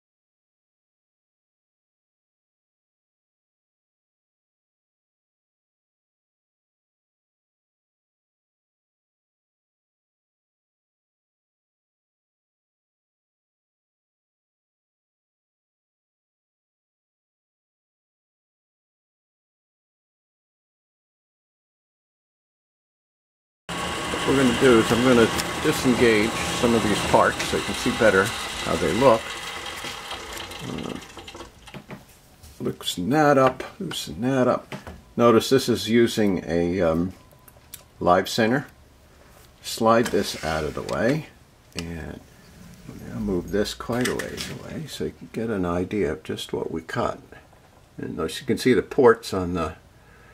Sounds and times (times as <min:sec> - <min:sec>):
Power tool: 0:23.7 - 0:31.8
Speech: 0:24.2 - 0:29.4, 0:30.6 - 0:31.0, 0:32.6 - 0:37.2, 0:38.0 - 0:38.8, 0:39.6 - 0:42.3, 0:42.9 - 0:47.4, 0:48.0 - 0:49.8.